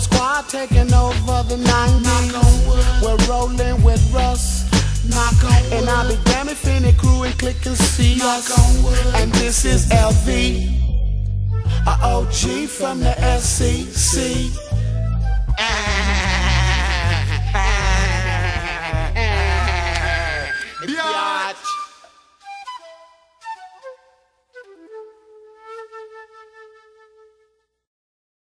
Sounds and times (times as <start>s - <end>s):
Rapping: 0.0s - 10.7s, 11.7s - 14.7s, 19.2s - 21.7s
Hip hop music: 0.0s - 22.0s
Reggae: 0.0s - 22.1s.